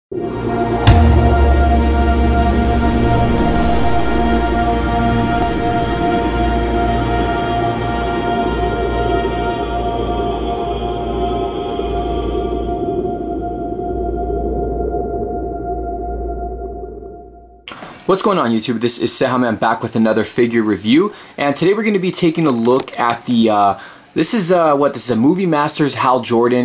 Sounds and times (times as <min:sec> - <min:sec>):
Scary music: 0:00.1 - 0:17.6.